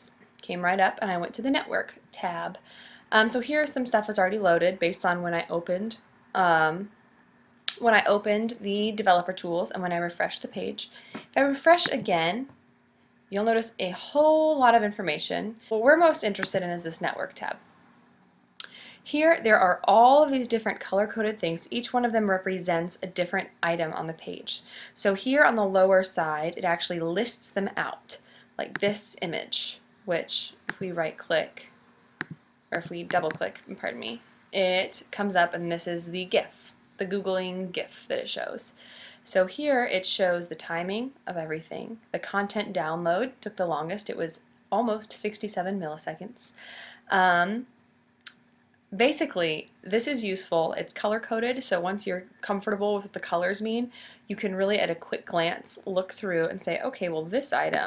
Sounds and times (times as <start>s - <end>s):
Speech: 0.0s - 6.9s, 7.7s - 12.5s, 13.3s - 17.6s, 19.1s - 31.6s, 32.8s - 47.7s, 49.0s - 57.8s.